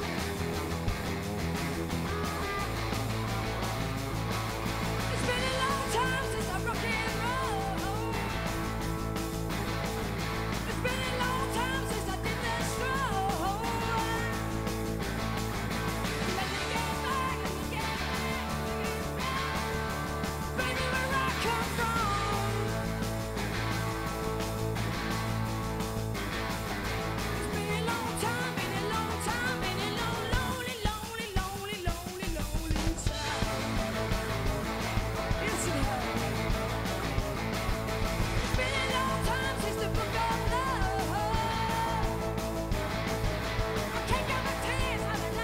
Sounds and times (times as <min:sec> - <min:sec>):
Rock and roll: 0:00.0 - 0:45.4.